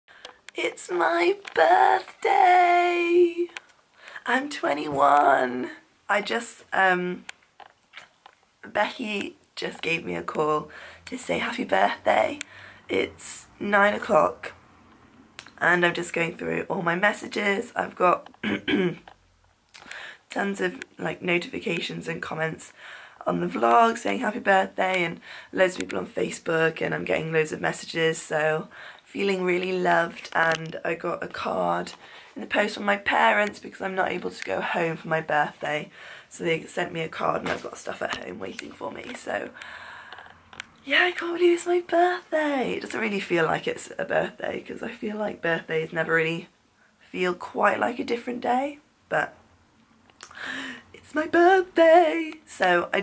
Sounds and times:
Speech: 0.6 - 3.6, 4.2 - 7.2, 8.6 - 14.6, 15.4 - 19.0, 20.3 - 39.6, 40.8 - 46.5, 47.1 - 49.3, 51.0 - 53.0.

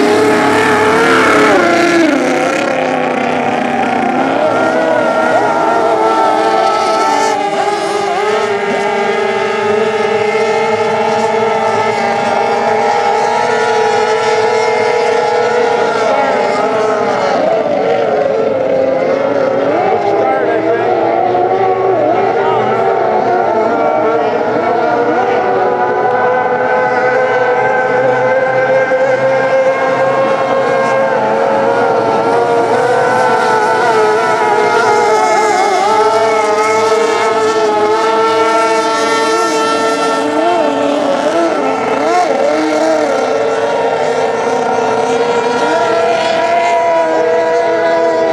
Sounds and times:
Motorboat, speedboat: 0.0 - 48.3
Speech: 19.7 - 21.3.

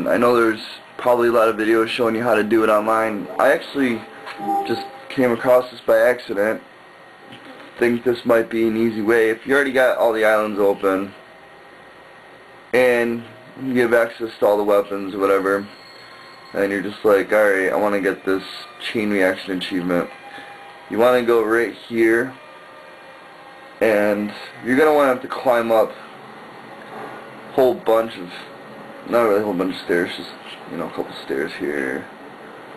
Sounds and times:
Speech: 0.0 - 6.7, 7.3 - 11.2, 12.8 - 15.8, 16.5 - 20.2, 20.9 - 22.4, 23.8 - 26.1, 27.5 - 32.2
Music: 2.3 - 5.1, 15.6 - 24.7.

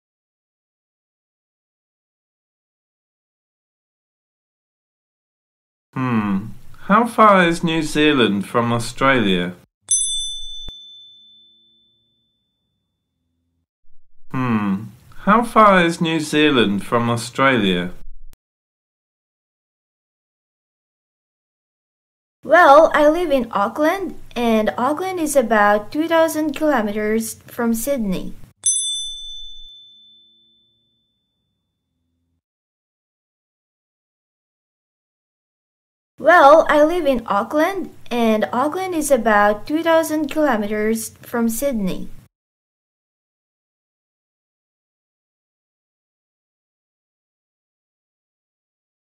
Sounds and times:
Speech: 6.0 - 9.6, 14.4 - 18.0, 22.5 - 28.4, 36.2 - 42.2.

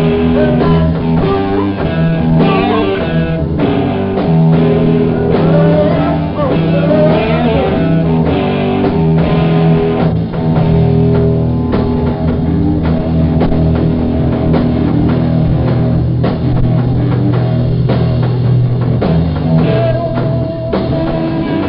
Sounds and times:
Guitar: 0.0 - 21.6
Psychedelic rock: 0.0 - 21.6.

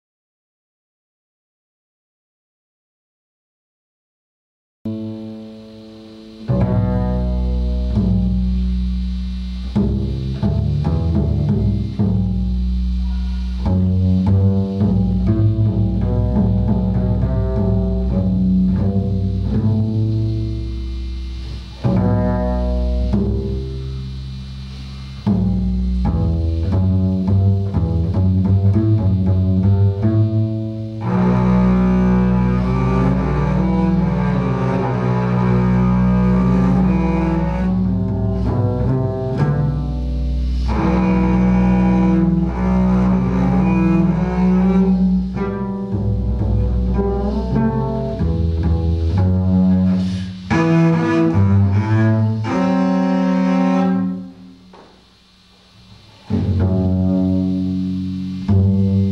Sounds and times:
Pizzicato: 4.9 - 54.9, 55.9 - 59.1
Cello: 4.9 - 59.1
Double bass: 4.9 - 59.1.

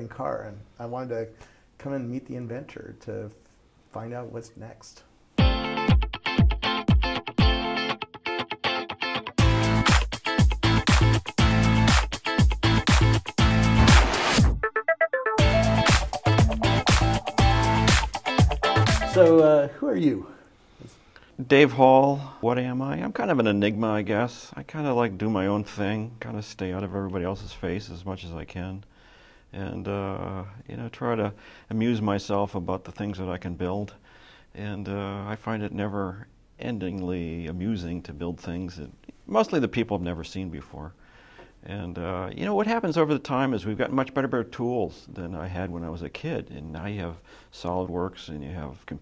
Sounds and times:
Speech: 0.0 - 3.4, 4.0 - 5.1, 19.1 - 20.4, 21.4 - 28.8, 29.5 - 34.0, 34.6 - 41.0, 41.6 - 49.0
Music: 5.4 - 19.7.

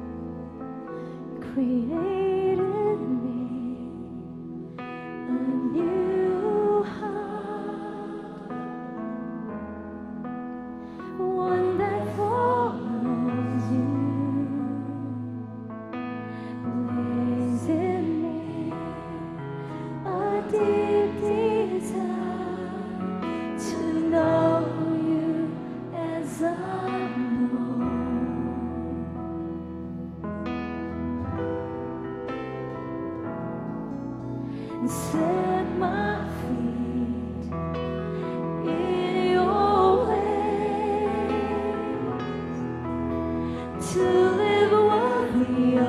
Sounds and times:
Music: 0.0 - 45.8.

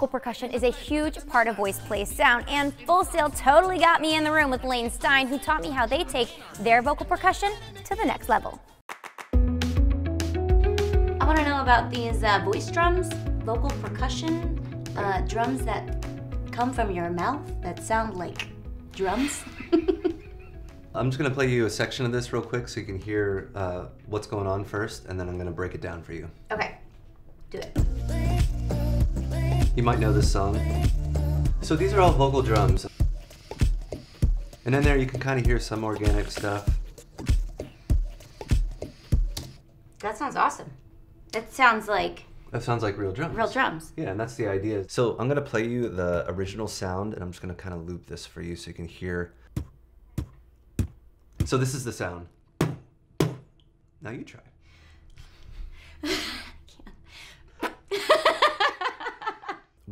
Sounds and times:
Music: 0.0 - 39.6.

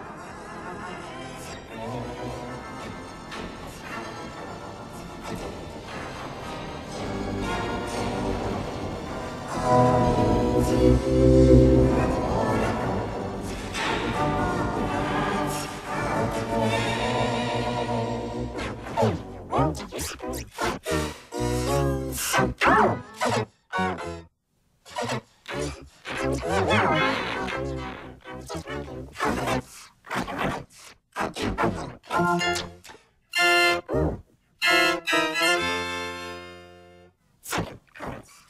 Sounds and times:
Music: 0.0 - 24.3, 24.9 - 30.6, 31.2 - 37.2.

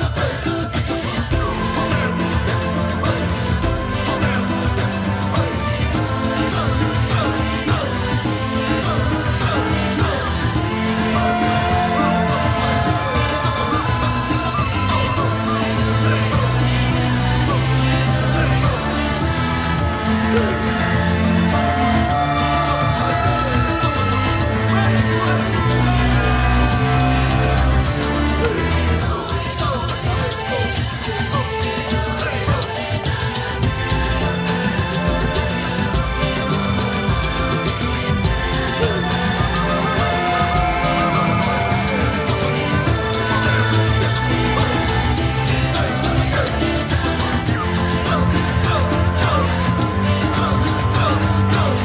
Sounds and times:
Funk: 0.0 - 51.8
Theme music: 0.0 - 51.8.

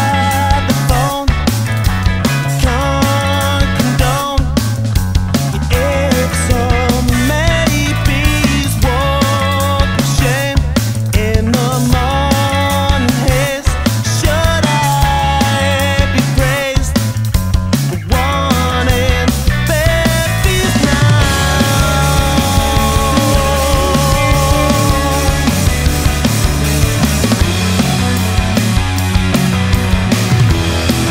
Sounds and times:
Drum: 0.0 - 31.1
Drum kit: 0.0 - 31.1
Rhythm and blues: 0.0 - 31.1.

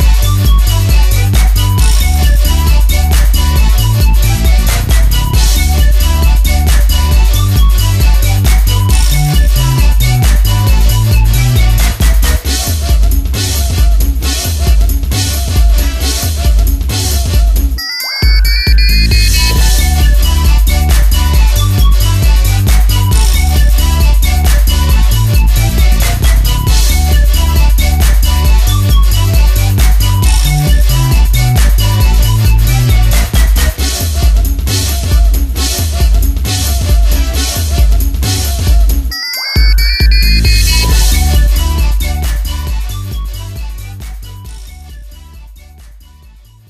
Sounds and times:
Rhythm and blues: 0.0 - 46.7.

